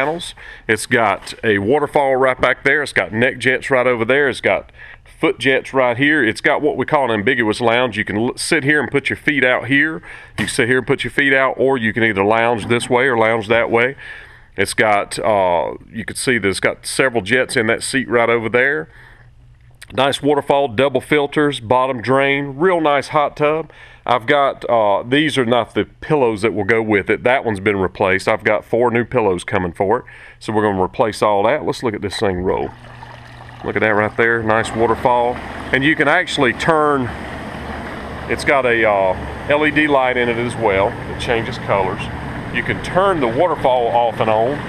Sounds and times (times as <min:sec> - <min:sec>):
Speech: 0:00.0 - 0:14.0, 0:14.6 - 0:18.9, 0:19.8 - 0:32.8, 0:33.6 - 0:37.1, 0:38.3 - 0:44.6
Bathtub (filling or washing): 0:32.0 - 0:36.4
Trickle, dribble: 0:32.2 - 0:35.6.